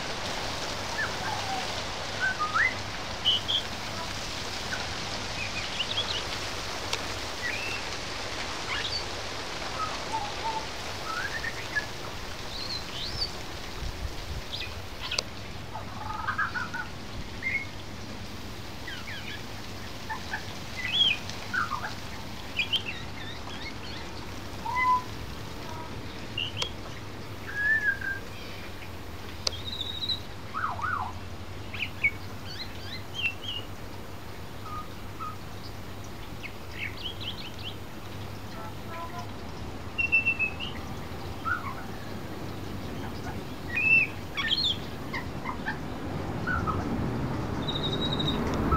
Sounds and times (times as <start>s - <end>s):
Bird vocalization, bird call, bird song: 0.9s - 4.1s, 4.7s - 6.3s, 7.4s - 7.9s, 8.7s - 9.1s, 9.8s - 13.4s, 14.5s - 18.2s, 18.8s - 47.0s, 47.6s - 48.7s.